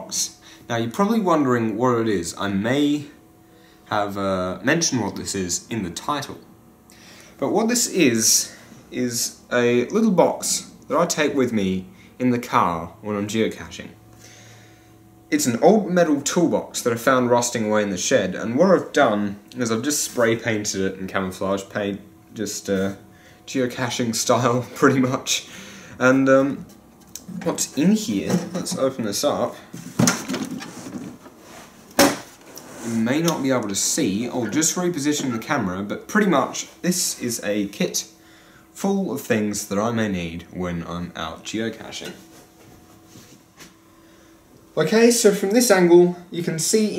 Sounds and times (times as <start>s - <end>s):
Speech: 0.0s - 3.2s, 3.9s - 6.5s, 7.4s - 14.0s, 15.3s - 29.7s, 32.8s - 38.1s, 38.8s - 42.2s, 44.8s - 46.9s
Inside, small room: 0.0s - 46.9s.